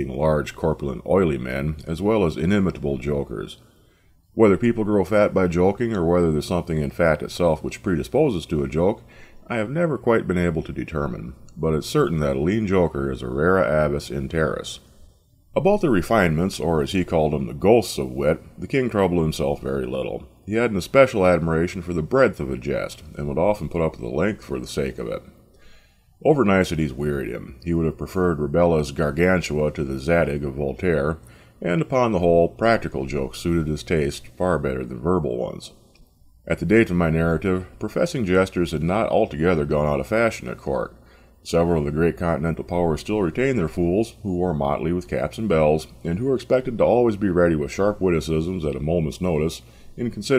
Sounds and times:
Speech: 0.0 - 3.6, 4.4 - 14.9, 15.6 - 25.4, 26.2 - 35.8, 36.5 - 50.3.

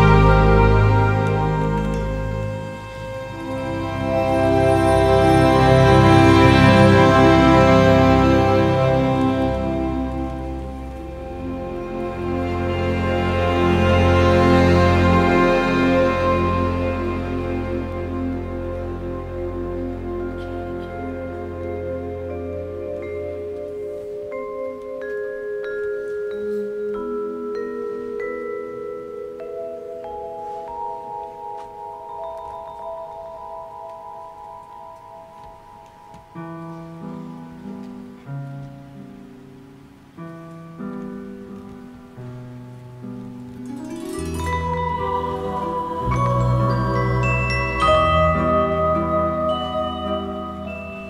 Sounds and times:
Marimba, xylophone: 19.4 - 38.2, 43.5 - 51.1
Vibraphone: 20.1 - 37.3, 43.6 - 51.1.

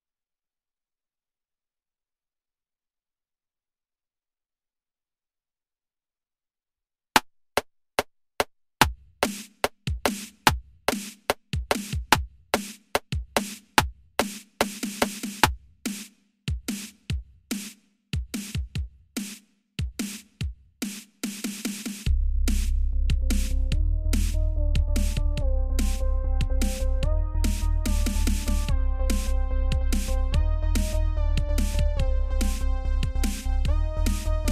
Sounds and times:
Dubstep: 22.5 - 34.5.

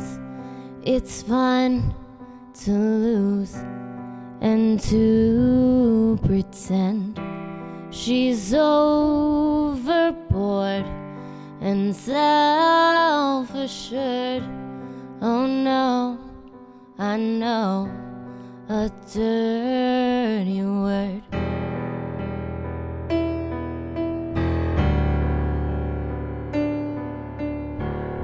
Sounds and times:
Piano: 0.0 - 28.2.

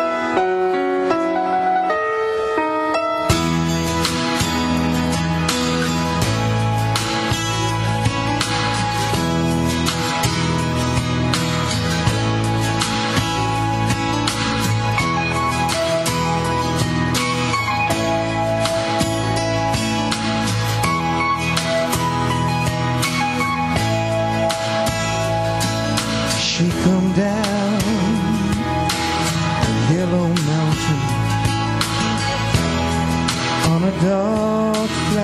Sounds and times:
Music: 0.0 - 35.2.

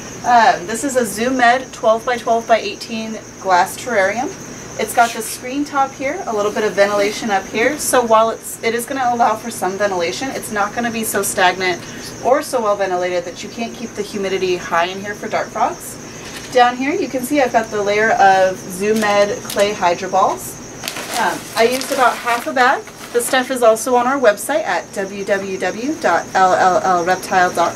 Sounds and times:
Speech: 0.3 - 27.7.

